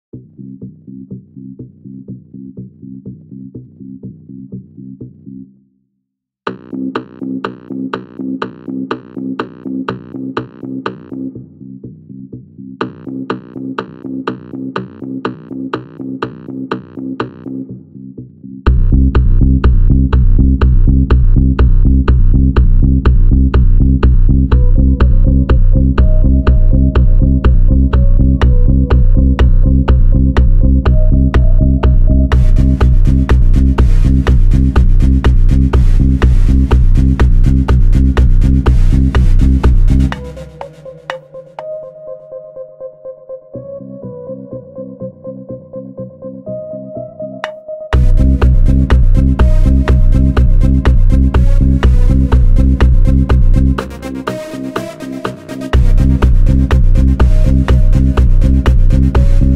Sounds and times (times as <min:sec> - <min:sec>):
Drum machine: 0:00.1 - 0:05.4, 0:06.5 - 0:41.8, 0:47.4 - 0:59.5.